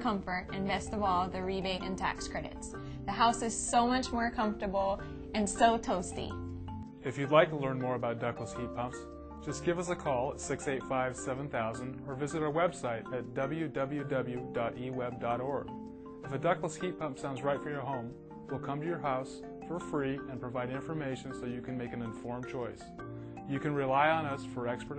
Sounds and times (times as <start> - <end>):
Speech: 0.0 - 6.3, 7.0 - 15.7, 16.3 - 22.8, 23.5 - 24.9
Music: 0.0 - 24.9.